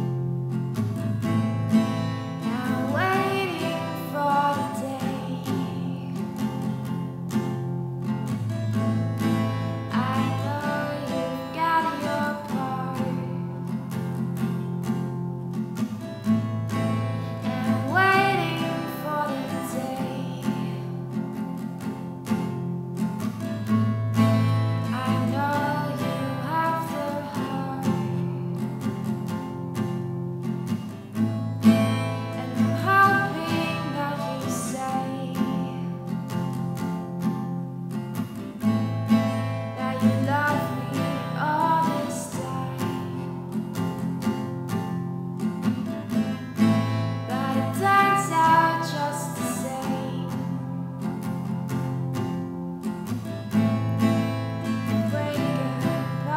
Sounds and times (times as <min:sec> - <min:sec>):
Music: 0:00.0 - 0:56.3
Female singing: 0:02.4 - 0:06.7, 0:09.9 - 0:13.7, 0:17.4 - 0:21.1, 0:24.9 - 0:28.6, 0:32.3 - 0:36.1, 0:39.7 - 0:43.5, 0:47.3 - 0:50.8, 0:54.7 - 0:56.3.